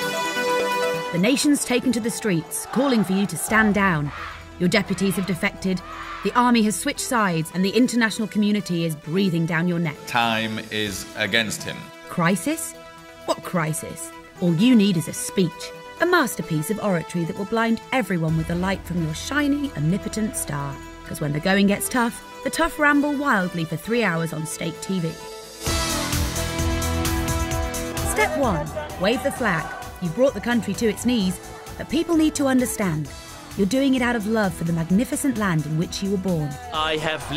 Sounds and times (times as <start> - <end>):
Music: 0.0 - 37.3
Female speech, woman speaking: 1.2 - 10.0, 12.1 - 12.7, 13.3 - 25.2, 28.0 - 36.7.